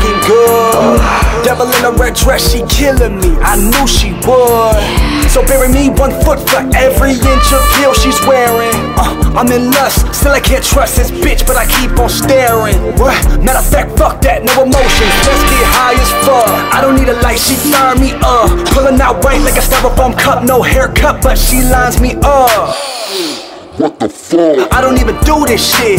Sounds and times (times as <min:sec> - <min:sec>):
Music: 0:00.0 - 0:23.8, 0:24.6 - 0:25.9.